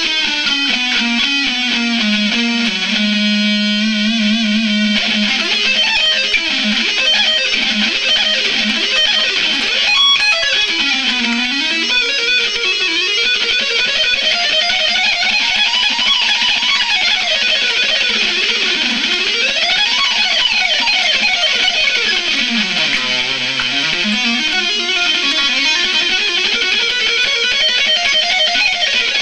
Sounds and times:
Electric guitar: 0:00.0 - 0:29.2.

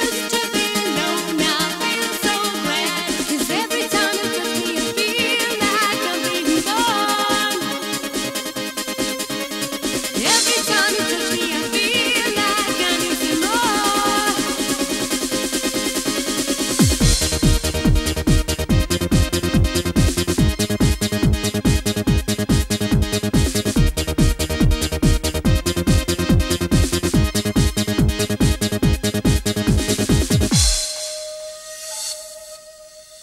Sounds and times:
Trance music: 0:00.0 - 0:33.2.

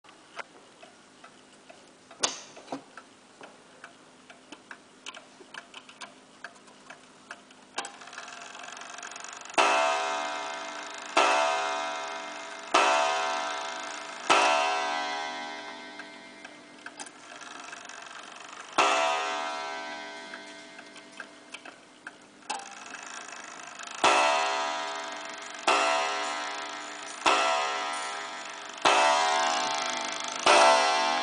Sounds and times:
Tick-tock: 0:03.8 - 0:11.4, 0:15.6 - 0:19.0, 0:19.8 - 0:24.2.

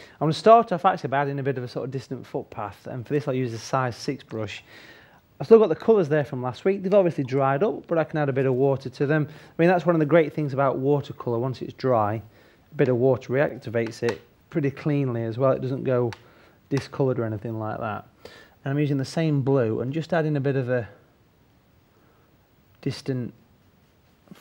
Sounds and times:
Speech: 0:00.2 - 0:04.7, 0:05.4 - 0:21.0, 0:22.8 - 0:23.4.

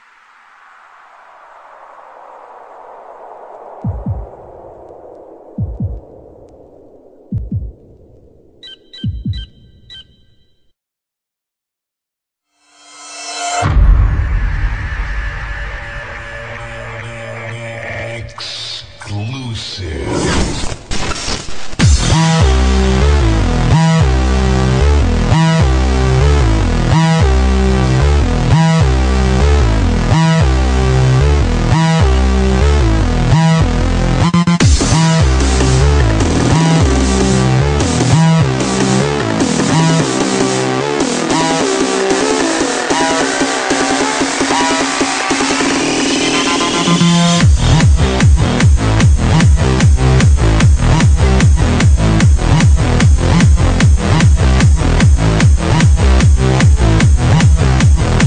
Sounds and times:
Electronic music: 0:01.2 - 0:10.3, 0:12.7 - 0:58.2.

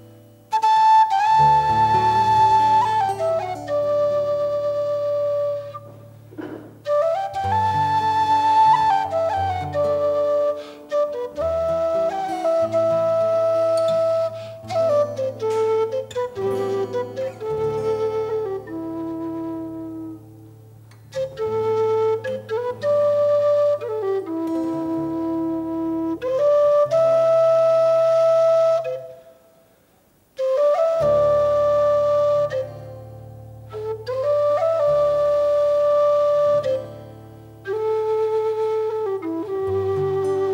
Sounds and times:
Flute: 0:00.0 - 0:40.5.

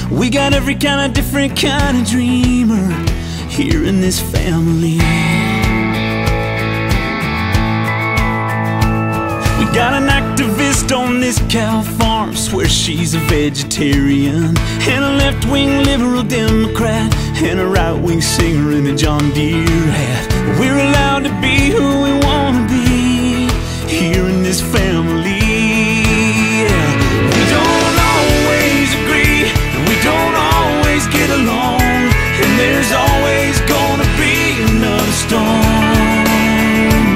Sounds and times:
Music: 0:00.0 - 0:37.1.

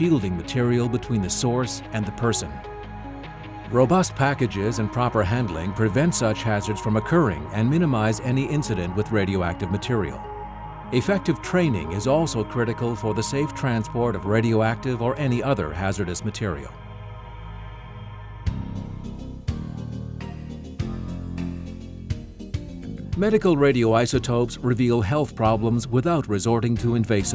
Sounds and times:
Speech: 0:00.0 - 0:02.6, 0:03.7 - 0:10.2, 0:11.0 - 0:16.8, 0:23.2 - 0:27.3
Music: 0:00.0 - 0:27.3.

